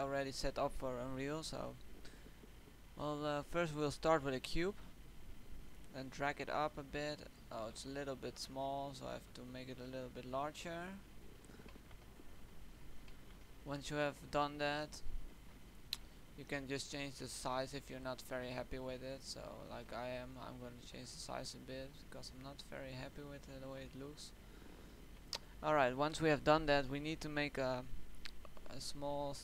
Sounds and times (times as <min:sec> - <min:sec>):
Speech: 0:00.0 - 0:01.8, 0:03.0 - 0:04.8, 0:05.9 - 0:11.1, 0:13.6 - 0:15.1, 0:16.4 - 0:24.4, 0:25.6 - 0:29.4.